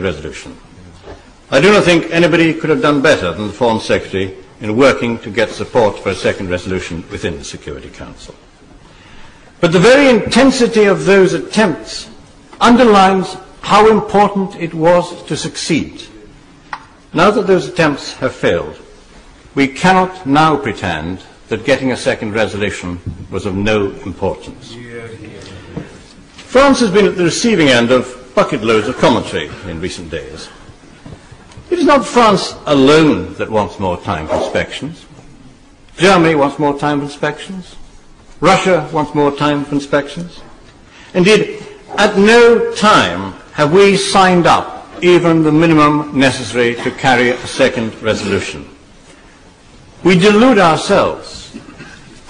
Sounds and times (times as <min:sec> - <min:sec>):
Male speech, man speaking: 0:00.0 - 0:00.6, 0:01.5 - 0:08.4, 0:09.6 - 0:16.2, 0:17.1 - 0:18.9, 0:19.6 - 0:25.7, 0:26.5 - 0:30.6, 0:31.7 - 0:35.1, 0:36.0 - 0:37.8, 0:38.4 - 0:40.5, 0:41.2 - 0:48.8, 0:50.0 - 0:51.6
Narration, monologue: 0:00.0 - 0:52.3.